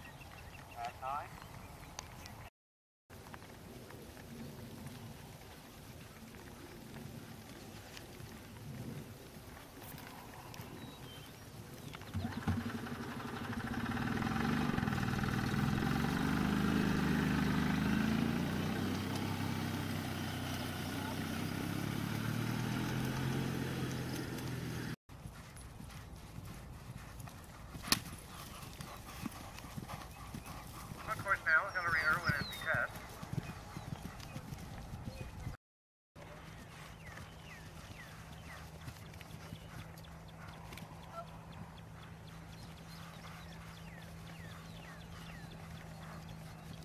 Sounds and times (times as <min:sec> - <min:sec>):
Clip-clop: 0:00.0 - 0:02.5, 0:03.1 - 0:35.6, 0:36.2 - 0:46.8.